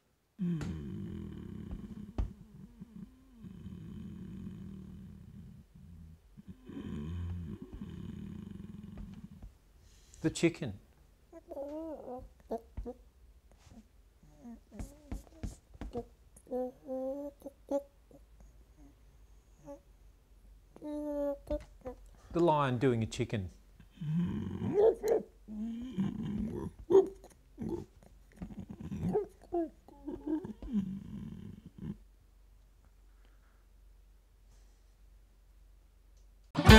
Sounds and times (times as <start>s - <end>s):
Speech: 10.2s - 10.8s, 22.3s - 23.6s.